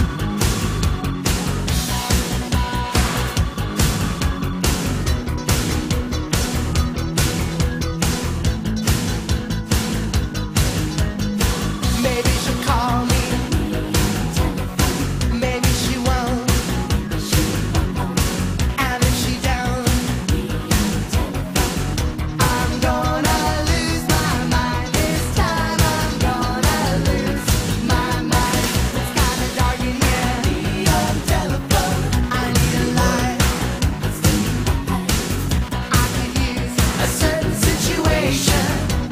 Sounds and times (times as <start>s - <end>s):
Music: 0.0s - 39.1s.